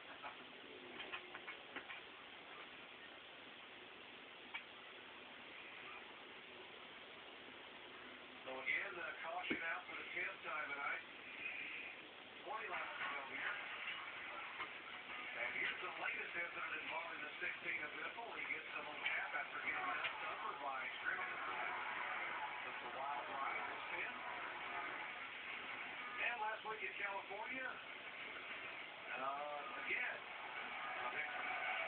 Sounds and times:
Speech: 8.4s - 11.1s, 12.4s - 13.6s, 15.4s - 21.6s, 22.7s - 24.3s, 26.2s - 27.8s, 29.1s - 30.2s.

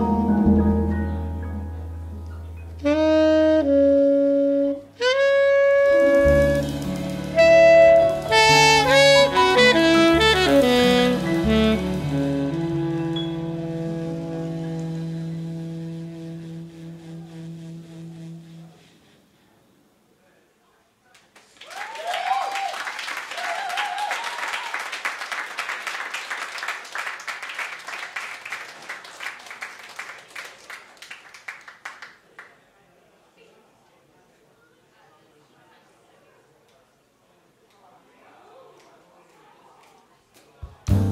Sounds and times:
Brass instrument: 2.8s - 19.4s, 40.9s - 41.1s
Saxophone: 2.8s - 19.6s.

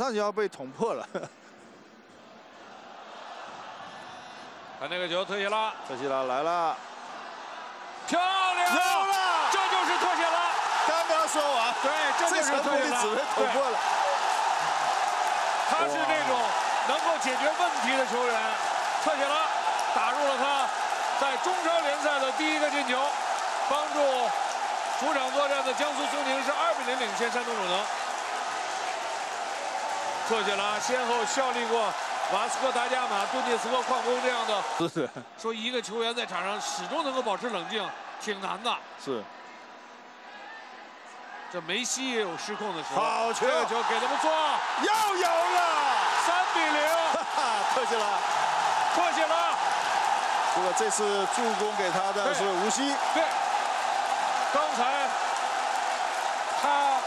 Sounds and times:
Speech: 0.0s - 1.3s, 4.8s - 6.8s, 8.1s - 14.2s, 15.7s - 23.1s, 23.7s - 24.4s, 25.0s - 27.9s, 30.3s - 39.3s, 41.5s - 48.2s, 49.0s - 49.6s, 50.6s - 53.4s, 54.6s - 55.1s, 56.6s - 57.0s.

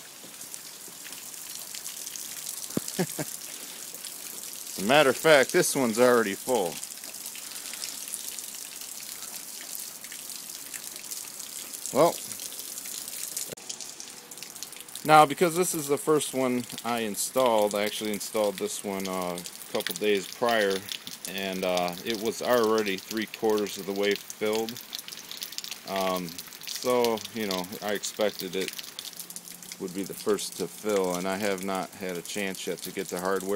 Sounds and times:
Raindrop: 0.0s - 33.5s.

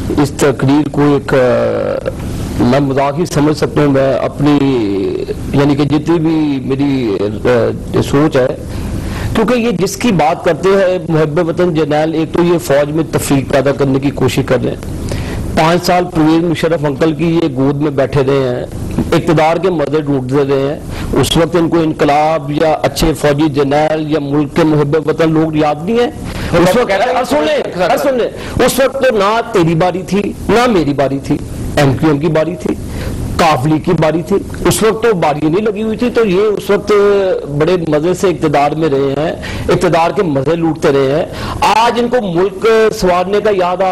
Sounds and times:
Speech: 0.1s - 8.7s, 9.4s - 14.8s, 15.6s - 32.8s, 33.4s - 43.9s.

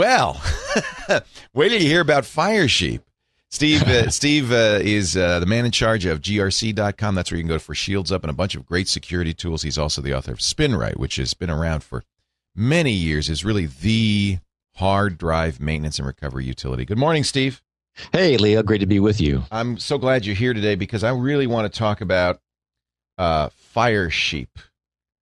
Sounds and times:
Speech: 0.0s - 0.4s, 1.1s - 12.0s, 12.6s - 22.4s, 23.2s - 24.7s.

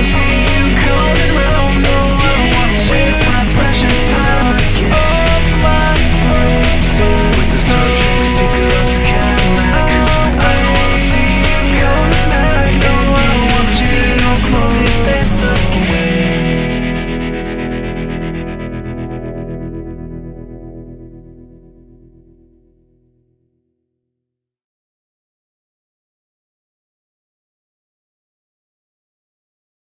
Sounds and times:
Music: 0.0s - 24.2s.

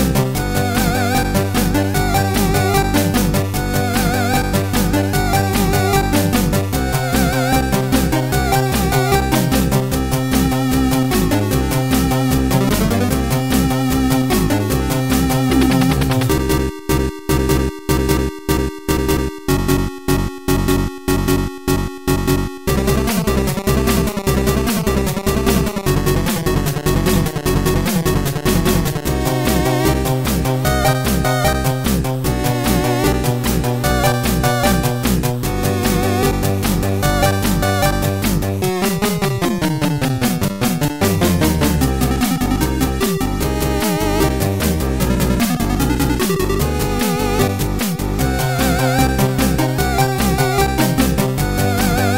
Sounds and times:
Music: 0.0s - 52.1s.

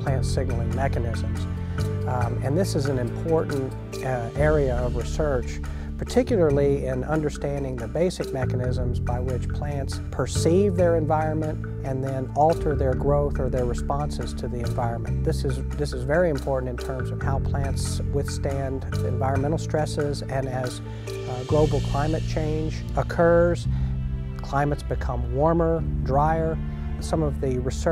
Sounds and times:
Speech: 0.0s - 1.5s, 2.1s - 23.7s, 24.4s - 27.9s
Music: 0.0s - 27.9s.

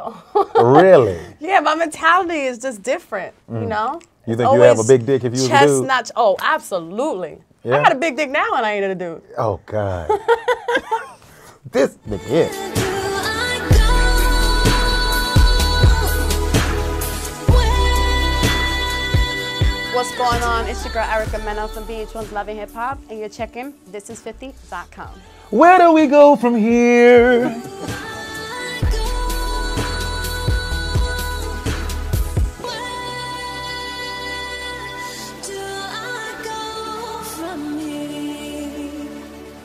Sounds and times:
Background music: 0.0s - 39.6s
Speech: 0.6s - 1.6s, 3.5s - 6.5s, 7.7s - 8.6s, 9.3s - 10.1s, 20.0s - 24.1s, 25.6s - 27.7s.

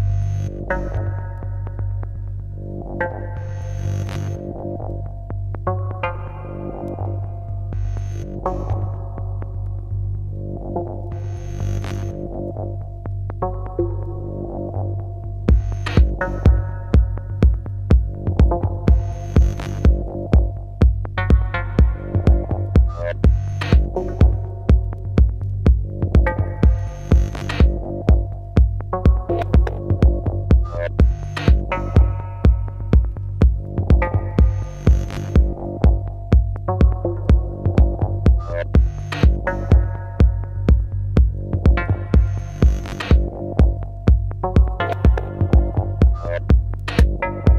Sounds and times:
Music: 0.0s - 47.5s.

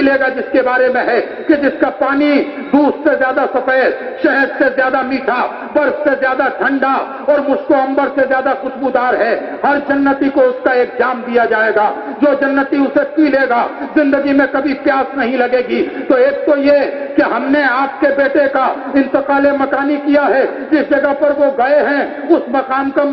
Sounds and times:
Male speech, man speaking: 0.0s - 23.1s
Narration, monologue: 0.0s - 23.1s.

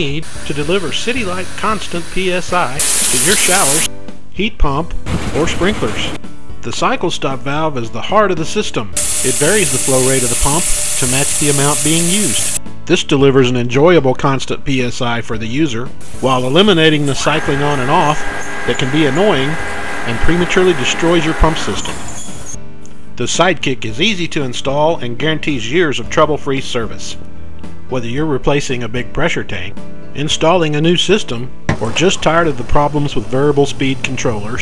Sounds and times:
Speech: 0.0s - 22.0s, 23.2s - 27.2s, 27.9s - 34.6s
Music: 0.0s - 34.6s.

